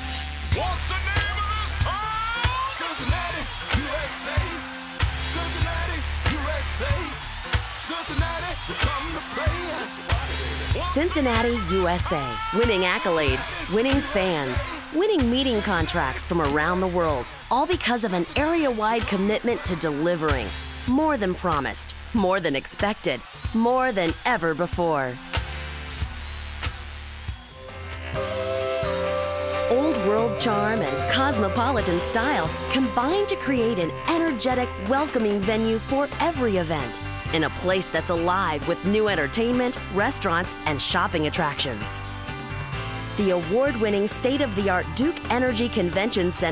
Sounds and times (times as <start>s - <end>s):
Music: 0.0s - 46.5s
Speech: 10.7s - 25.2s, 29.7s - 42.0s, 43.2s - 46.5s.